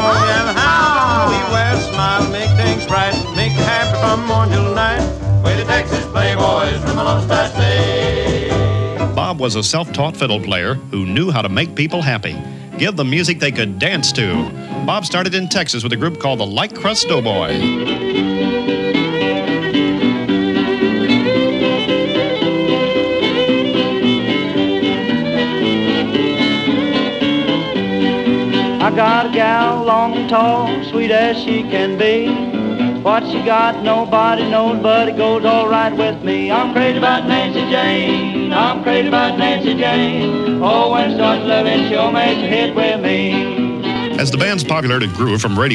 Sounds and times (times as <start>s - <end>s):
Song: 0.0s - 18.0s, 44.1s - 45.7s
Swing music: 0.0s - 45.7s.